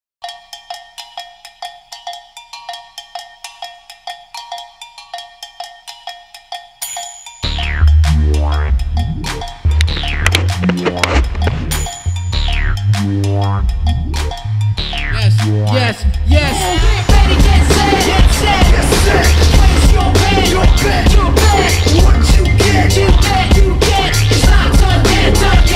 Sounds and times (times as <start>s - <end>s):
Wood block: 0.2s - 16.3s.